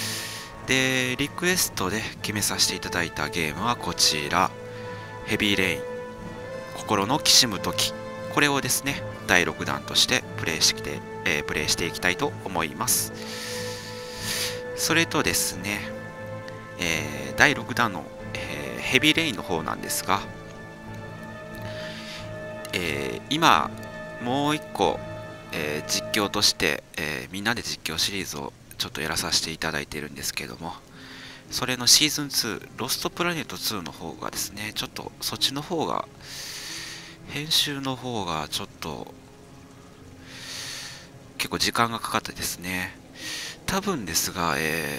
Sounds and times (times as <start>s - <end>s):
Music: 0.0s - 44.9s
Speech: 0.7s - 4.5s, 5.3s - 5.8s, 6.8s - 13.1s, 14.8s - 15.9s, 16.8s - 20.3s, 22.7s - 30.9s, 31.5s - 36.1s, 37.3s - 39.1s, 41.4s - 43.0s, 43.7s - 44.9s.